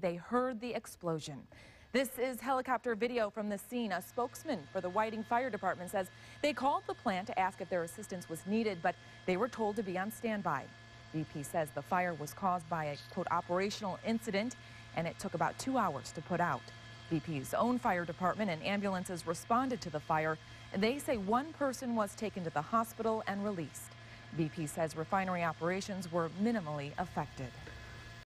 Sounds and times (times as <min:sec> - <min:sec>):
Speech: 0:00.0 - 0:27.6.